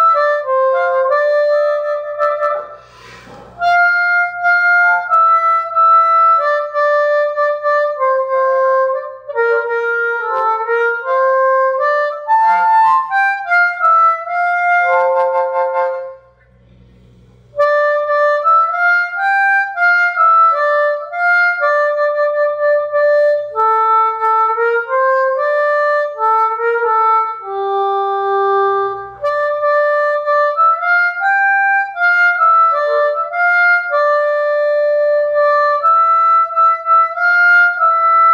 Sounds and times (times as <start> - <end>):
Wind instrument, woodwind instrument: 0.0 - 16.5, 17.5 - 38.3
Harmonica: 0.0 - 38.3.